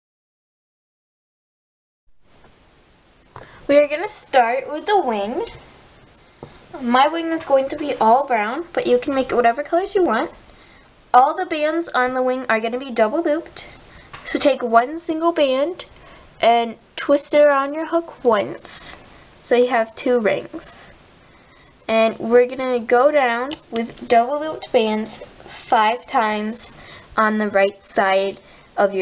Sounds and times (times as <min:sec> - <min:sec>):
Speech: 0:03.7 - 0:05.6, 0:06.8 - 0:10.4, 0:11.1 - 0:21.0, 0:21.9 - 0:29.0.